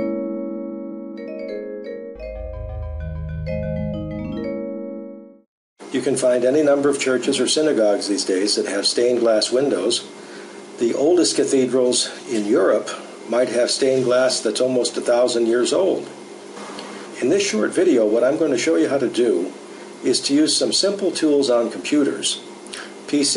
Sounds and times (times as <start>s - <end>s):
Music: 0.0s - 5.5s
Speech: 5.9s - 10.1s, 10.8s - 16.2s, 17.2s - 22.5s, 23.1s - 23.3s.